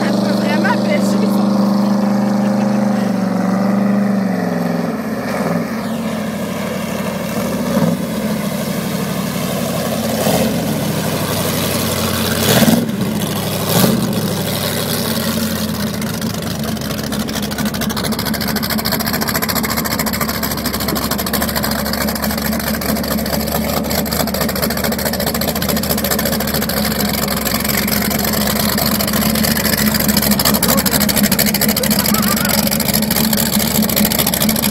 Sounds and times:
Motorboat, speedboat: 0.0s - 34.7s.

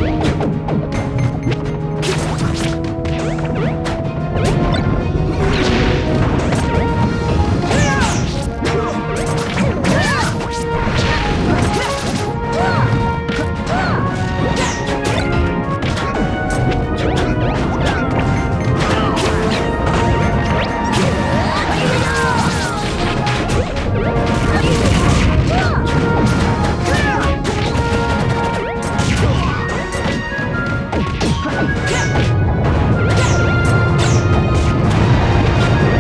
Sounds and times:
Music: 0.0s - 36.0s
Smash, crash: 4.4s - 30.2s.

